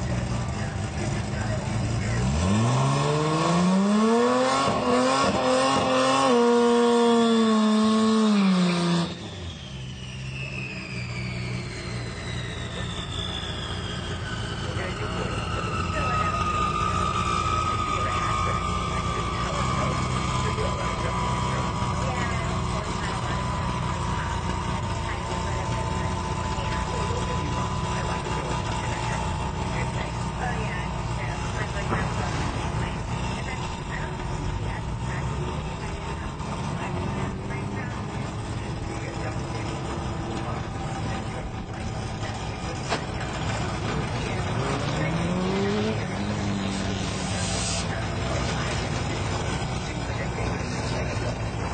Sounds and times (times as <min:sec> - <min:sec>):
Speech: 0:00.0 - 0:02.5, 0:14.7 - 0:51.7.